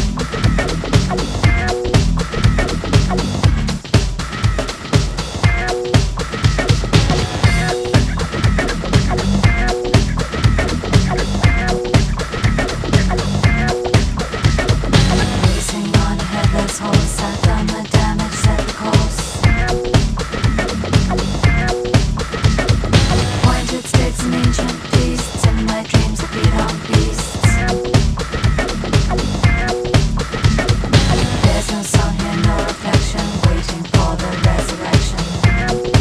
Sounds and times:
Music: 0.0 - 36.0.

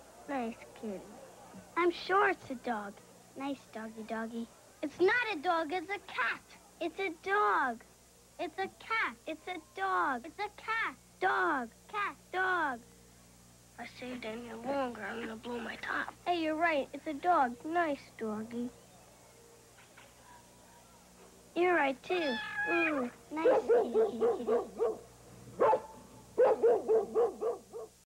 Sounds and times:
Speech: 13.8 - 18.8
Bow-wow: 23.4 - 28.0.

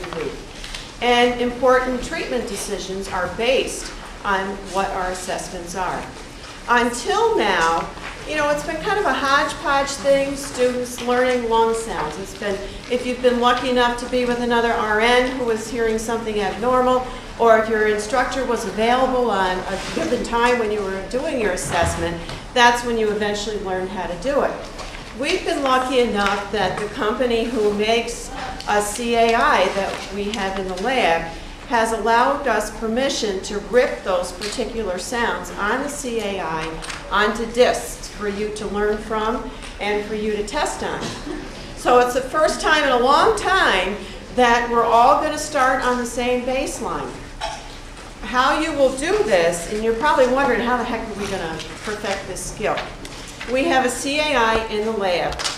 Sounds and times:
Speech: 0.0 - 0.4, 1.0 - 47.2, 48.2 - 55.5.

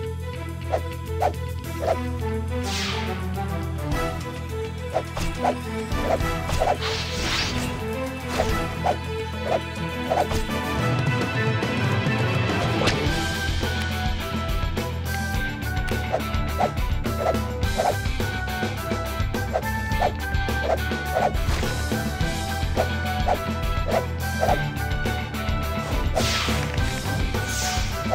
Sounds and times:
Music: 0.0 - 28.1.

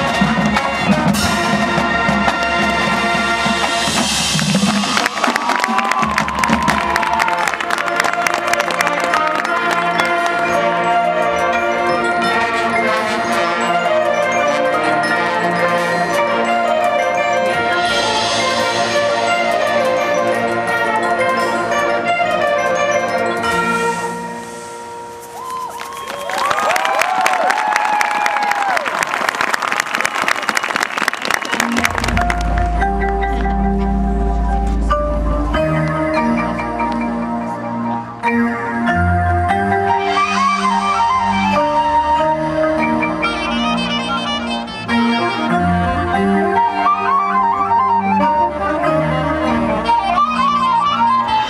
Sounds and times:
Crowd: 0.0 - 17.6, 25.0 - 51.4
Cheering: 4.8 - 10.0, 25.3 - 32.3.

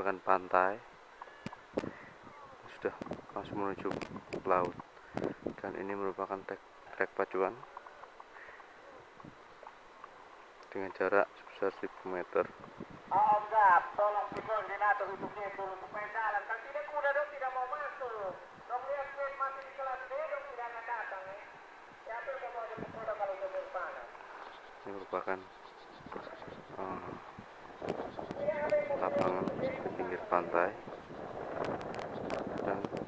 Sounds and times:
Speech: 28.4 - 30.8.

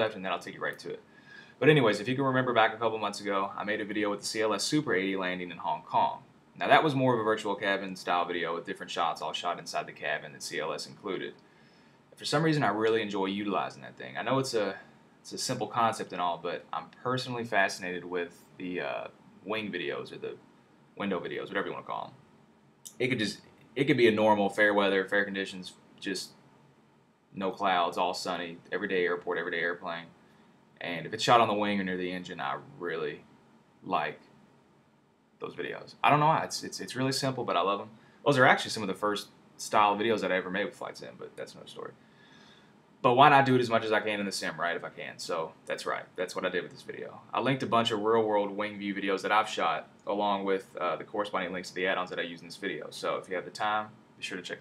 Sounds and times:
Speech: 0.0 - 11.4, 12.2 - 20.4, 21.0 - 22.2, 22.9 - 26.4, 27.4 - 30.2, 30.8 - 34.2, 35.4 - 42.0, 43.0 - 54.6.

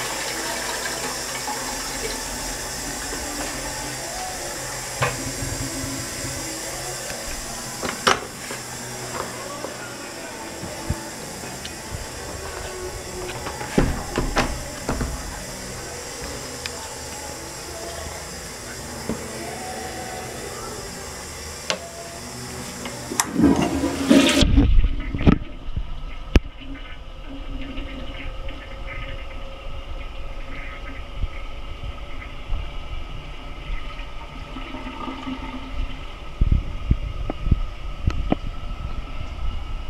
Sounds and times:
Toilet flush: 0.0 - 29.4, 33.3 - 36.4.

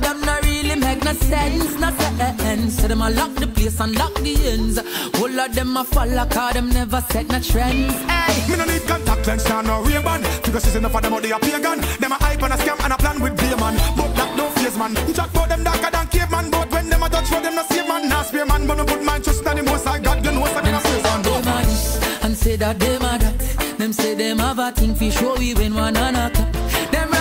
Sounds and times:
Music: 0.0 - 27.2.

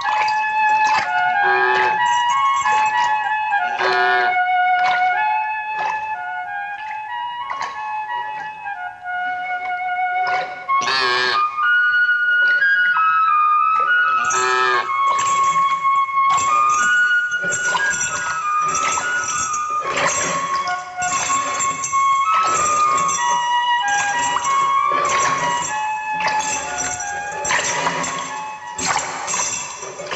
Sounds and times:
Flute: 0.0 - 30.1.

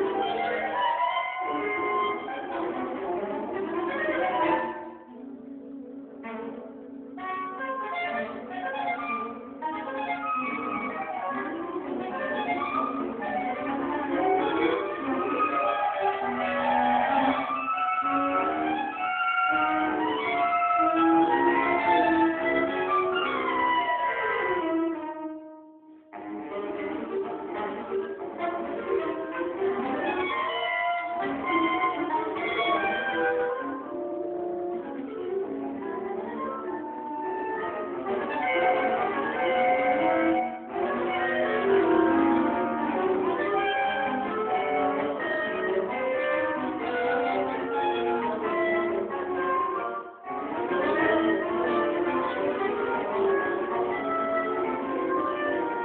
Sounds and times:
Brass instrument: 0.0 - 55.8
Clarinet: 0.0 - 55.8.

